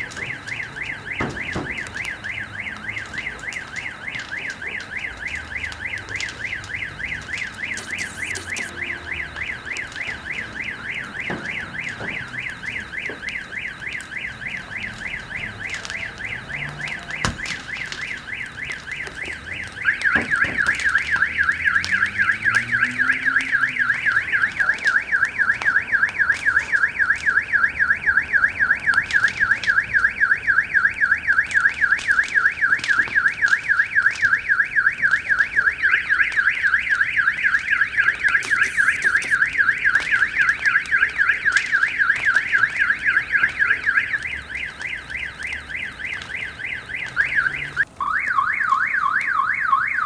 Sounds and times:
Fire: 0.0 - 50.0.

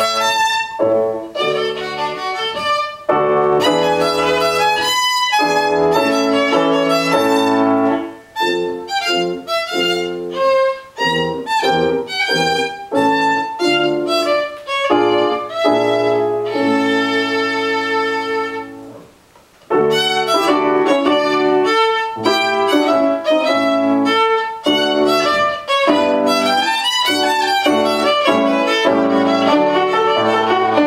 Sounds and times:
Violin, fiddle: 0.0 - 18.9, 19.7 - 30.8.

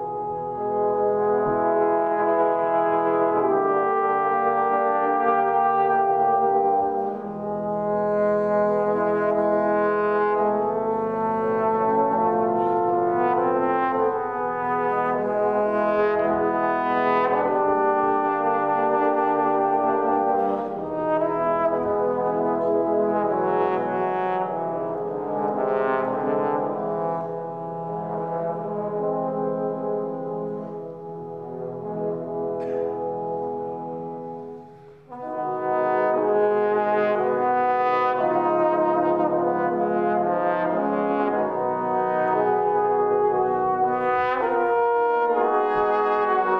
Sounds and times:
Trombone: 0.0 - 46.5.

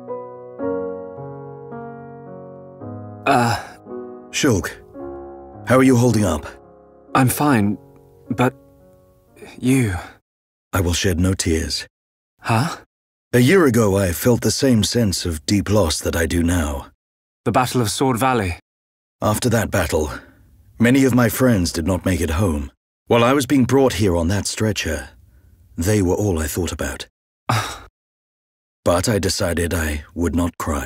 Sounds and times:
Speech: 4.4 - 4.8, 5.7 - 6.6, 7.2 - 8.6, 9.4 - 10.2, 10.8 - 11.9, 12.5 - 12.8, 13.4 - 18.6, 19.2 - 25.2, 25.8 - 27.1, 28.9 - 30.8.

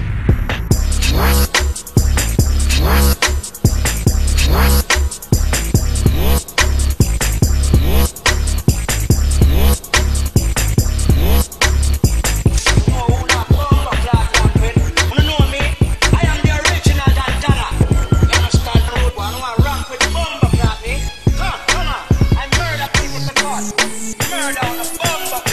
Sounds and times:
Music: 0.0 - 25.5.

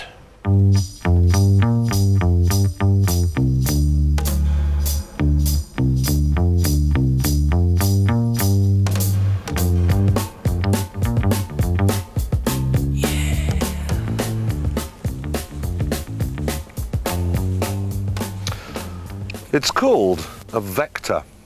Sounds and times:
Music: 0.0 - 21.0.

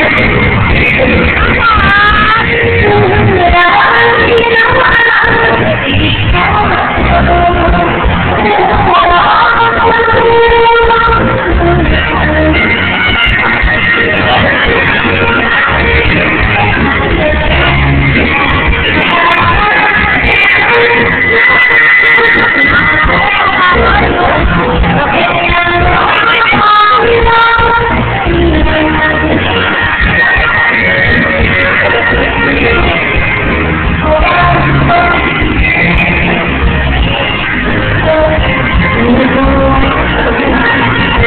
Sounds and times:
Inside, public space: 0.0 - 41.2
Music: 0.0 - 41.2
Singing: 0.0 - 41.2.

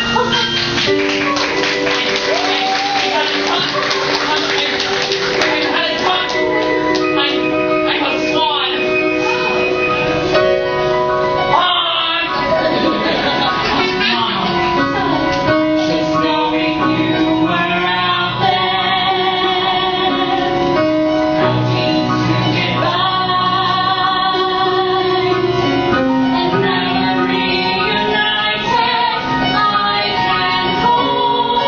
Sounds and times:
Music: 0.0 - 31.6.

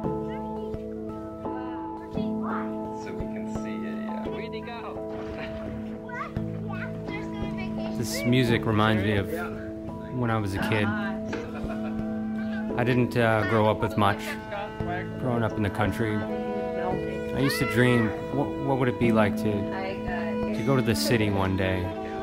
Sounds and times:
Music: 0.0 - 22.2.

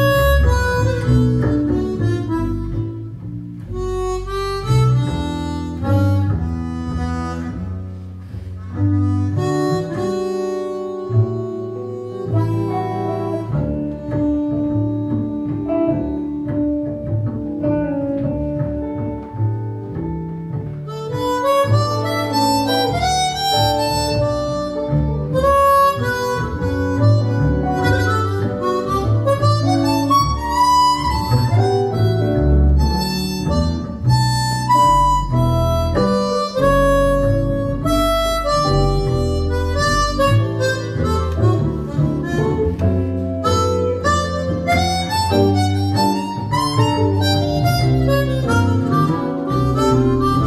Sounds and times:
Harmonica: 0.0 - 17.5, 20.7 - 50.4
Guitar: 0.0 - 50.4.

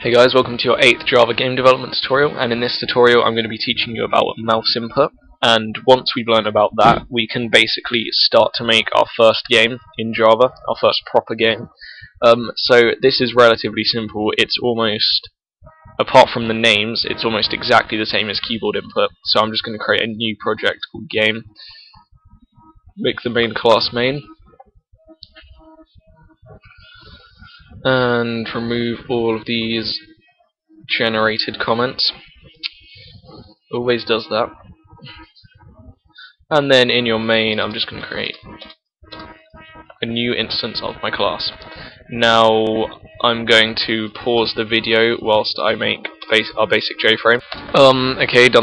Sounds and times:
Speech: 0.0 - 15.3, 16.0 - 22.0, 23.0 - 24.4, 26.4 - 30.2, 30.9 - 38.6, 40.0 - 48.6.

